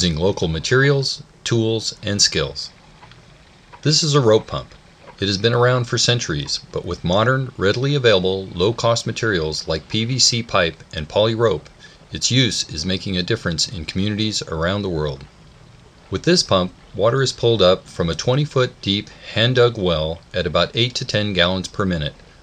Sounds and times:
Speech: 0:00.0 - 0:02.8, 0:03.8 - 0:15.3, 0:16.1 - 0:22.2.

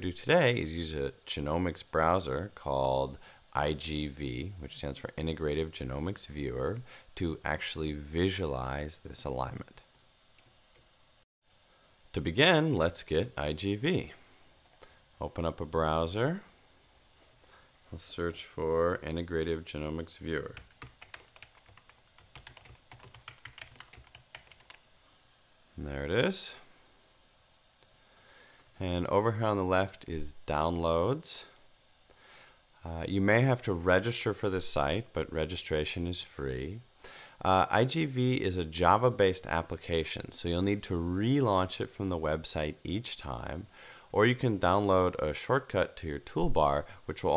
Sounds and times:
Computer keyboard: 0:20.6 - 0:24.8.

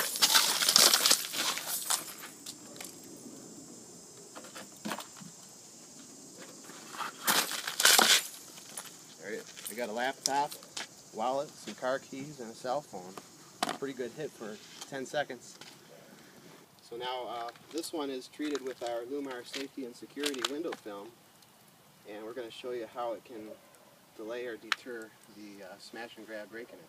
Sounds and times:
Outside, urban or manmade: 0:00.0 - 0:26.8
Speech: 0:09.2 - 0:10.6, 0:16.8 - 0:21.1, 0:22.1 - 0:23.6, 0:24.2 - 0:26.8.

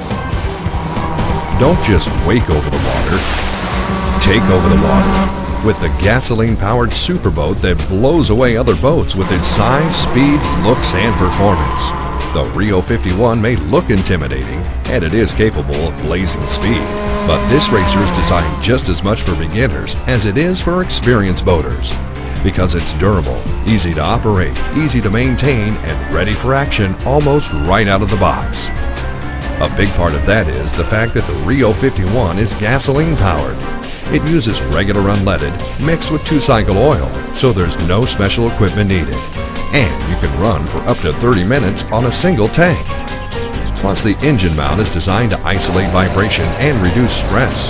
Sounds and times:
Music: 0:00.0 - 0:47.7
Speech: 0:01.5 - 0:03.3, 0:04.2 - 0:28.8, 0:29.6 - 0:42.9, 0:43.8 - 0:47.7.

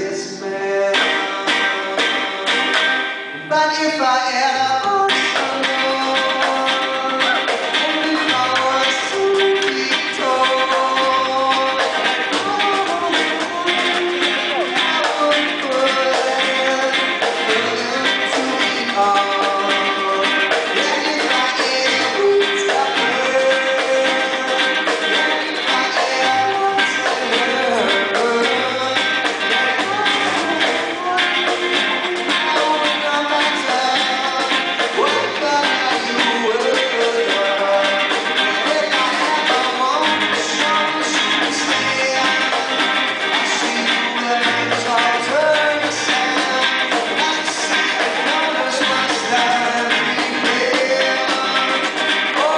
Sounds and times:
Music: 0:00.0 - 0:52.5.

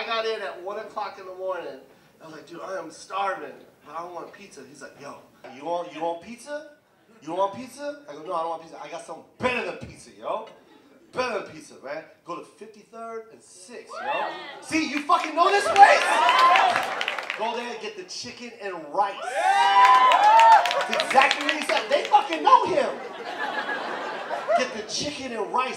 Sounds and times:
Speech: 0:00.0 - 0:14.0, 0:14.6 - 0:16.1, 0:17.4 - 0:19.2, 0:20.9 - 0:23.0, 0:24.6 - 0:25.7.

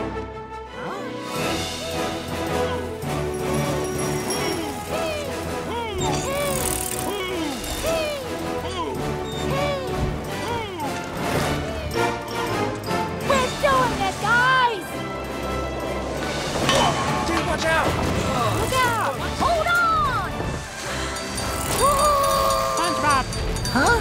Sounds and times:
Music: 0:00.0 - 0:24.0
Bicycle: 0:03.3 - 0:08.2, 0:17.7 - 0:24.0.

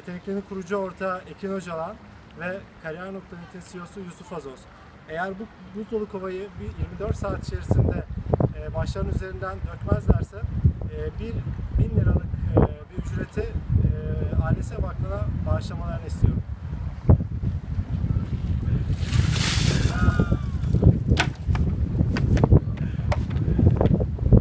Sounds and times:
Speech: 0:00.0 - 0:16.4.

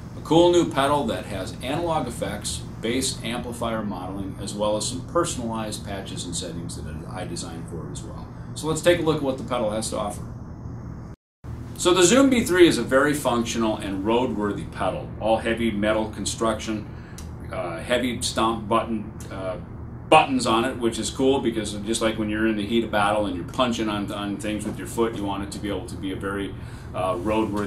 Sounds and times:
Speech: 0:00.2 - 0:10.3, 0:11.8 - 0:27.6.

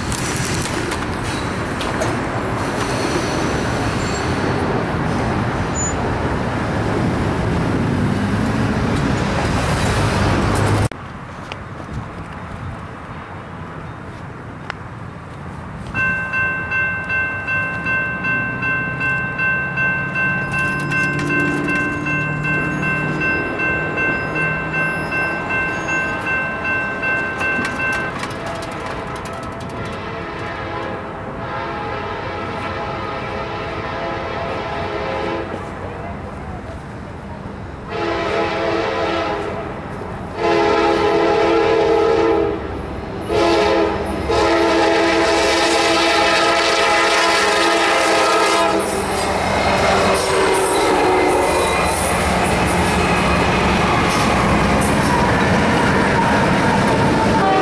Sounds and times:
Railroad car, train wagon: 0:00.0 - 0:57.6
Train whistle: 0:29.0 - 0:35.6, 0:37.9 - 0:39.6, 0:40.4 - 0:42.7, 0:43.3 - 0:54.3, 0:55.0 - 0:57.6.

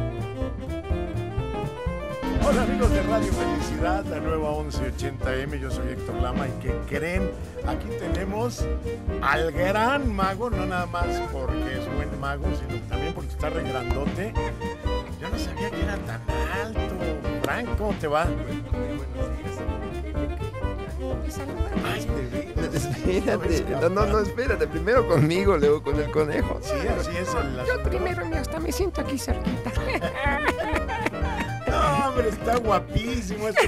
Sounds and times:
Music: 0:00.0 - 0:33.6
Speech: 0:02.4 - 0:08.6, 0:09.2 - 0:14.4, 0:15.2 - 0:19.6, 0:21.2 - 0:30.5, 0:31.7 - 0:33.6.

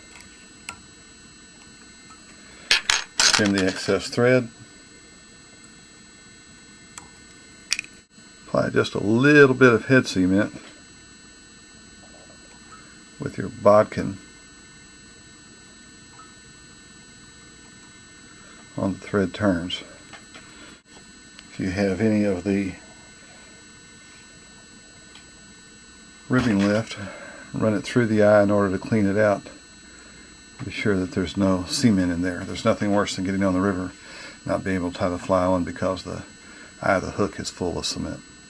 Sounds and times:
Speech: 0:03.3 - 0:04.6, 0:08.5 - 0:10.7, 0:13.2 - 0:14.2, 0:18.8 - 0:20.0, 0:21.5 - 0:22.8, 0:26.3 - 0:29.6, 0:30.6 - 0:38.2.

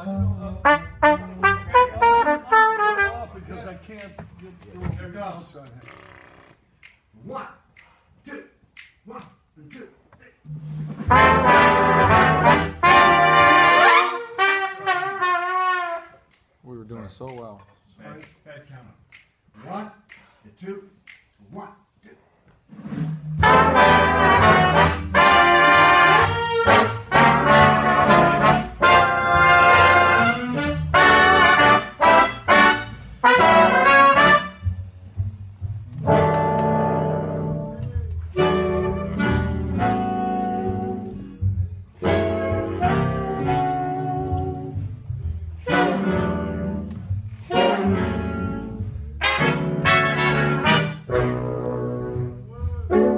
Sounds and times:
Trumpet: 0:00.5 - 0:03.5, 0:11.0 - 0:16.3, 0:23.4 - 0:35.0, 0:36.0 - 0:41.3, 0:42.0 - 0:45.0, 0:45.6 - 0:53.1.

